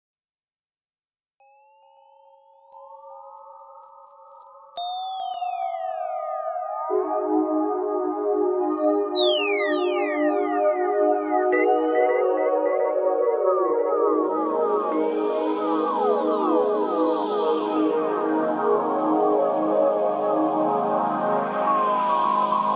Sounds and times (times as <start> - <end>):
Synthesizer: 1.4 - 22.7.